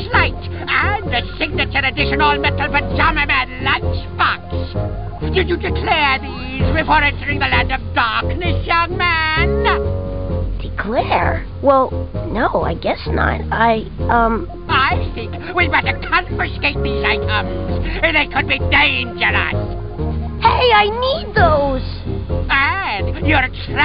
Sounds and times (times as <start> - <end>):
Speech: 0.0 - 4.8, 5.4 - 9.8, 10.6 - 19.6, 20.4 - 23.8
Music: 0.0 - 23.8.